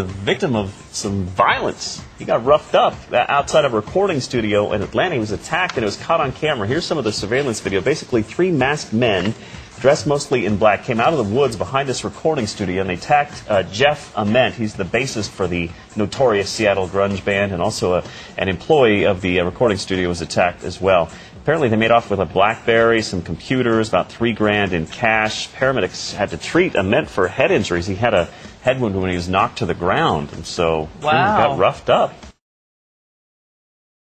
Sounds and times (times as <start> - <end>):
Music: 0.0 - 32.4
Speech: 0.0 - 32.4.